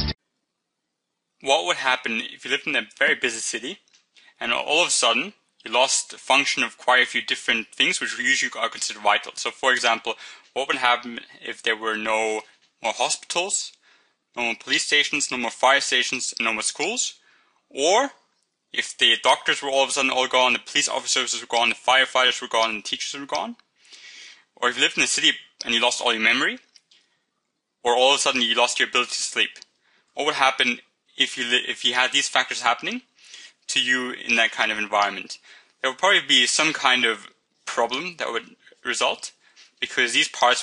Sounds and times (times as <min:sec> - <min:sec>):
Speech: 0:01.4 - 0:13.8, 0:14.4 - 0:18.2, 0:18.8 - 0:26.7, 0:27.9 - 0:40.6.